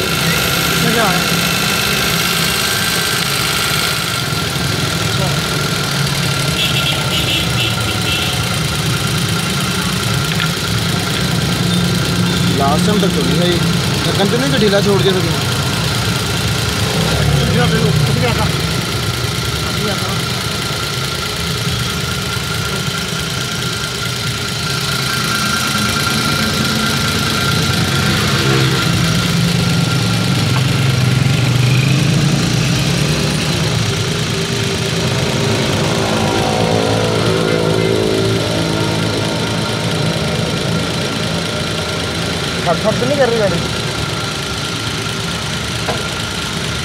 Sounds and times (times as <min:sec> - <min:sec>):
Car: 0:00.0 - 0:46.8
Medium engine (mid frequency): 0:00.0 - 0:46.8
Speech: 0:12.4 - 0:15.5, 0:42.6 - 0:43.7.